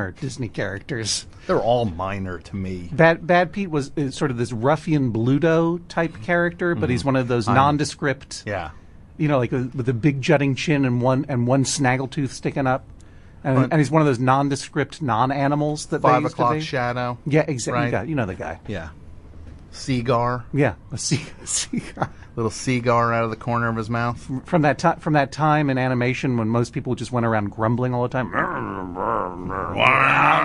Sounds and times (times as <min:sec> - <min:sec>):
Speech: 0:00.0 - 0:12.8, 0:13.4 - 0:19.0, 0:19.8 - 0:28.6
Inside, small room: 0:00.0 - 0:30.4.